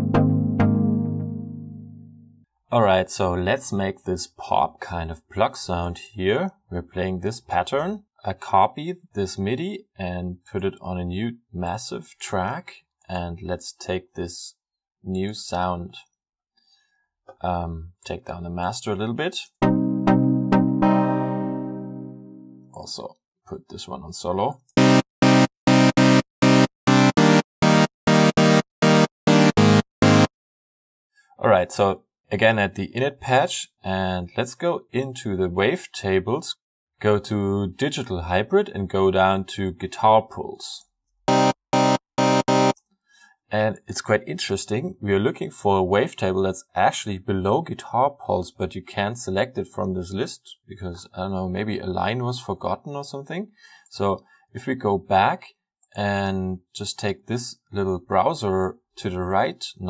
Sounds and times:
Music: 0.0s - 2.4s, 19.6s - 22.8s, 24.7s - 30.3s, 41.3s - 42.8s
Speech: 2.7s - 16.2s, 17.3s - 19.6s, 22.8s - 24.6s, 31.4s - 40.9s, 43.5s - 59.8s.

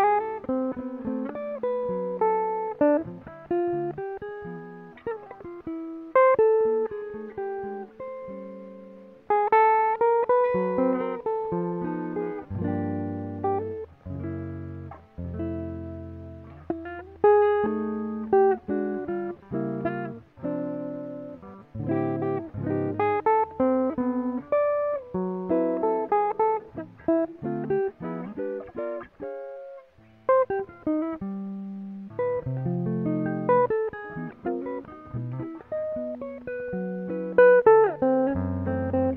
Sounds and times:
Electric guitar: 0.0s - 39.1s
Strum: 10.0s - 39.1s.

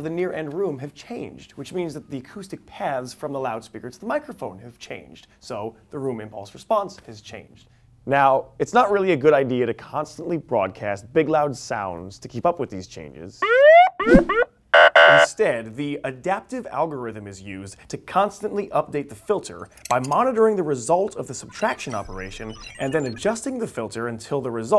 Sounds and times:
Speech: 0.0s - 13.4s, 15.3s - 24.7s.

